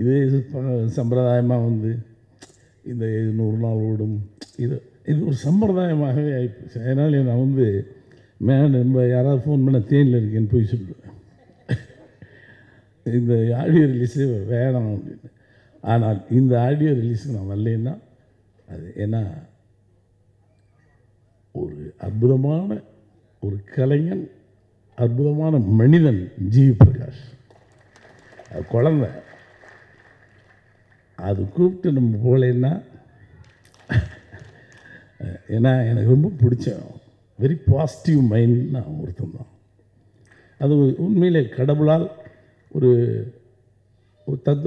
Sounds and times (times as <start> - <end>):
Male speech, man speaking: 0.0 - 2.1, 2.9 - 11.1, 13.1 - 18.1, 18.7 - 19.5, 21.5 - 24.4, 25.0 - 27.4, 28.5 - 29.2, 31.2 - 33.0, 35.2 - 39.6, 40.6 - 43.4, 44.3 - 44.6
Narration, monologue: 0.0 - 44.6.